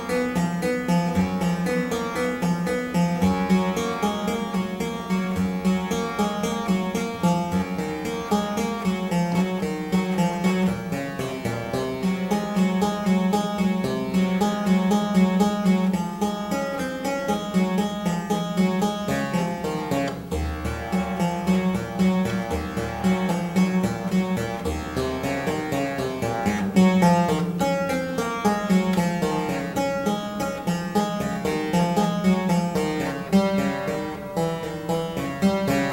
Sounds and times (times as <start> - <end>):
Music: 0.0 - 35.9.